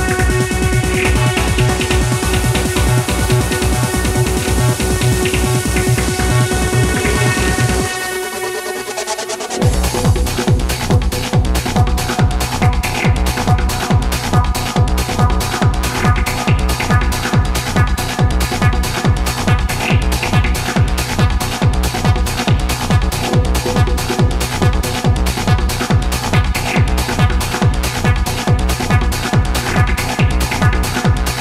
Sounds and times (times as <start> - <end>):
Trance music: 0.0 - 31.4.